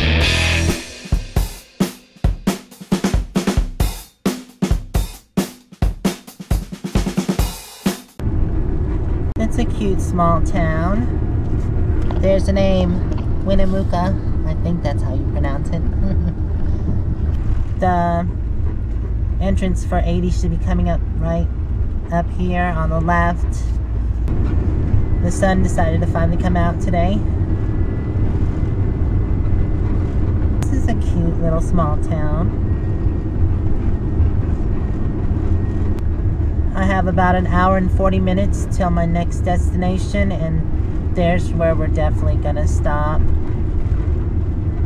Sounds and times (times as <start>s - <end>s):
Vehicle: 8.2s - 44.8s.